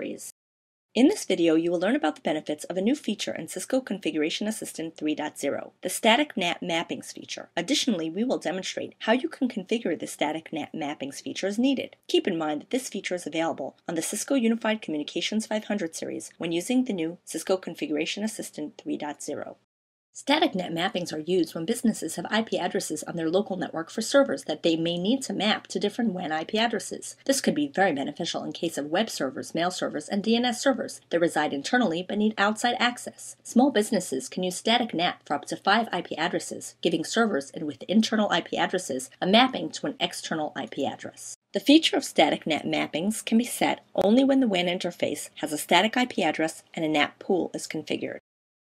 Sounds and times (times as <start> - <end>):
Speech: 0.0 - 0.4, 1.0 - 48.3.